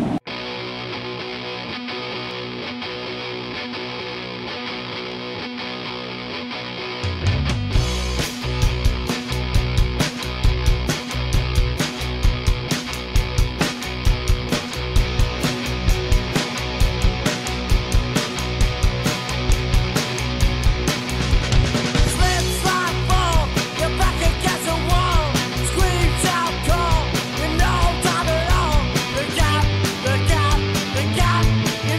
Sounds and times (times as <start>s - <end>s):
Blues: 0.0s - 31.9s
Rhythm and blues: 6.6s - 31.9s.